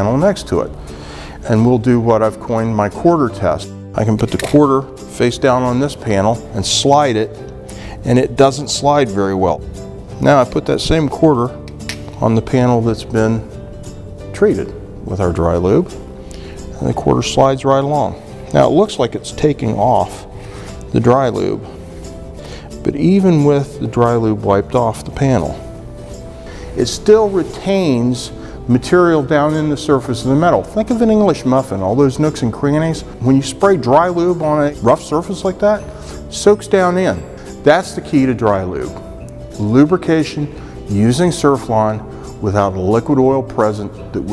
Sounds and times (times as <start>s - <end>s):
Speech: 0.0s - 0.7s, 1.4s - 7.4s, 8.0s - 9.6s, 10.2s - 11.5s, 12.2s - 13.5s, 14.4s - 15.9s, 16.8s - 20.3s, 20.9s - 21.7s, 22.8s - 25.6s, 26.8s - 39.0s, 39.6s - 44.3s
Music: 0.0s - 44.3s.